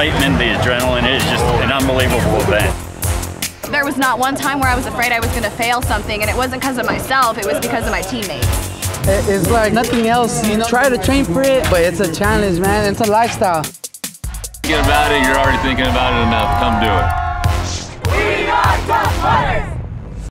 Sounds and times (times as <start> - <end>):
Music: 0.0 - 20.2.